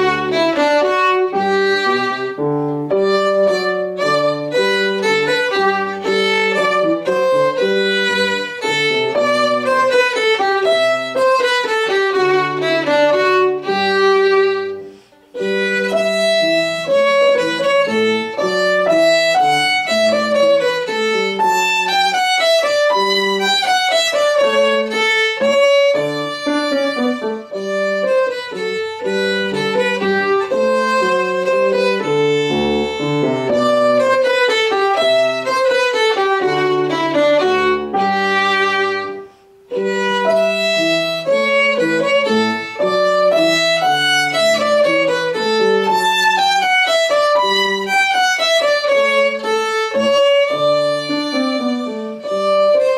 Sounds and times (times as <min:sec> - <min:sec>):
Violin, fiddle: 0:00.0 - 0:52.9.